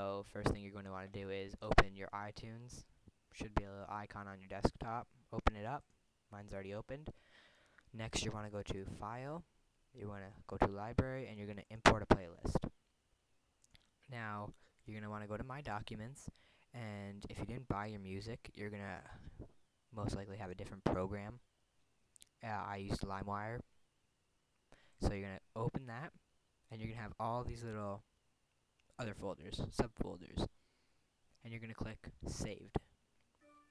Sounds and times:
Speech: 0:00.0 - 0:07.2, 0:07.9 - 0:12.8, 0:14.1 - 0:19.4, 0:20.0 - 0:21.4, 0:22.2 - 0:23.6, 0:25.0 - 0:28.0, 0:29.0 - 0:30.5, 0:31.4 - 0:32.9.

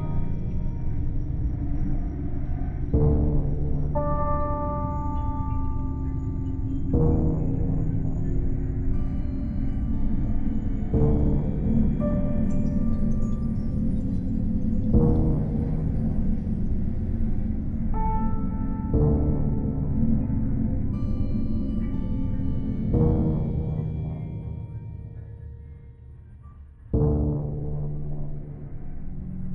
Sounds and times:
Music: 0:00.0 - 0:29.5.

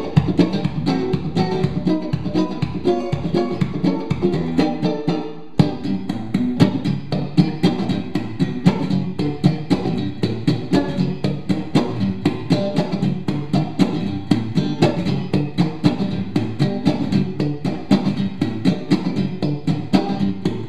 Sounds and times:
Electric guitar: 0:00.0 - 0:20.6.

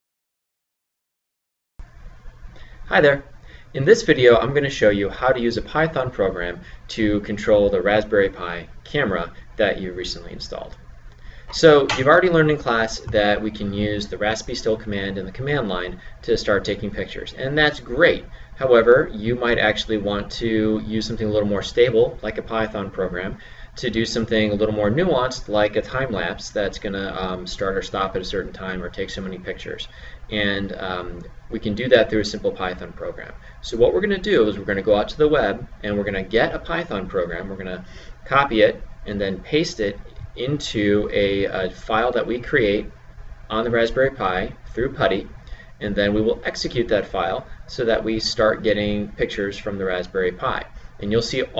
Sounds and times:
Speech: 0:02.9 - 0:10.8, 0:11.5 - 0:51.6.

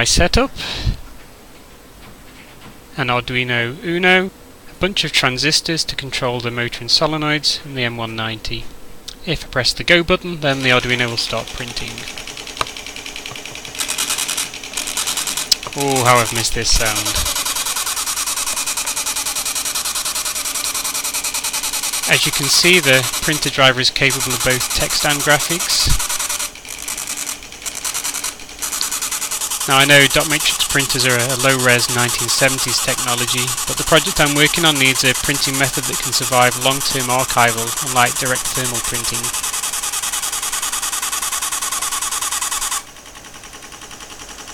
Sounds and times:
Speech: 0:00.0 - 0:00.6, 0:03.0 - 0:12.1, 0:15.7 - 0:17.3, 0:22.1 - 0:26.0, 0:29.7 - 0:39.4
Printer: 0:10.5 - 0:44.5.

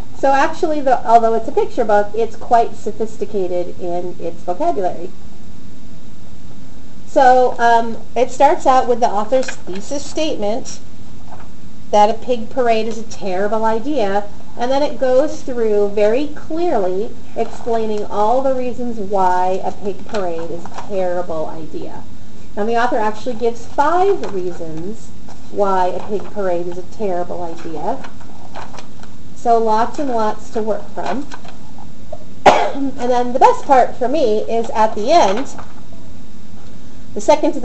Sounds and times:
Speech: 0:00.2 - 0:05.1, 0:07.1 - 0:10.8, 0:12.0 - 0:28.1, 0:29.4 - 0:31.3, 0:32.6 - 0:35.6, 0:37.2 - 0:37.6.

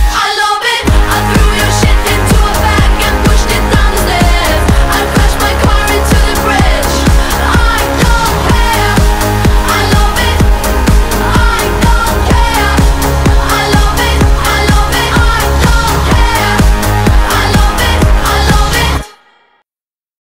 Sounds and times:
Background music: 0:00.0 - 0:19.6.

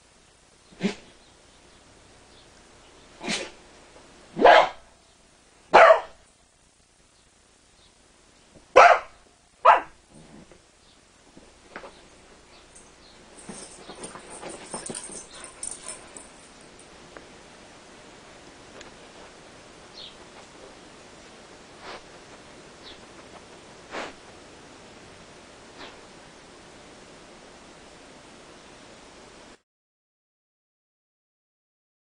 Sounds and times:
Bow-wow: 0:03.2 - 0:03.6, 0:04.4 - 0:04.9, 0:05.7 - 0:06.2, 0:08.8 - 0:10.0.

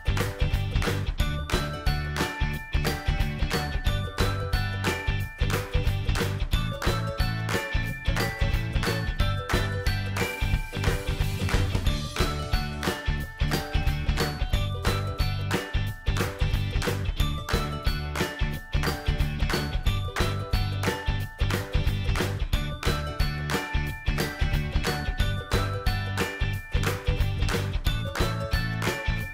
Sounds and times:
Music: 0:00.0 - 0:29.3.

